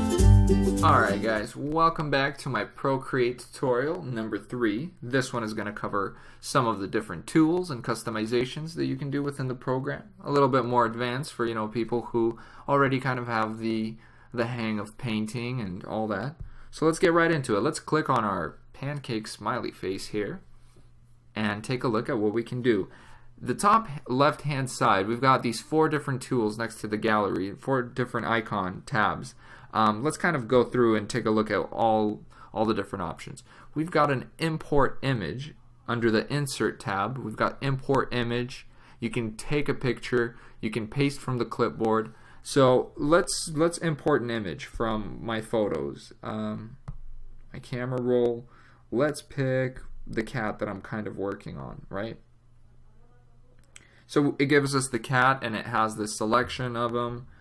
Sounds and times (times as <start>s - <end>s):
Speech: 0.8s - 20.5s, 21.3s - 46.9s, 47.5s - 57.3s.